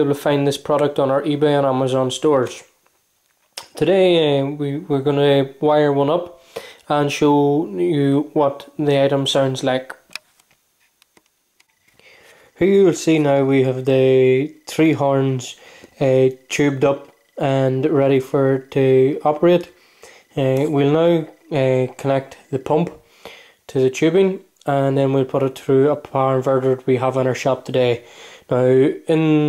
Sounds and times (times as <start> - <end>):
Speech: 0.0 - 2.8, 3.6 - 10.0, 12.6 - 19.7, 20.4 - 23.0, 23.7 - 29.4.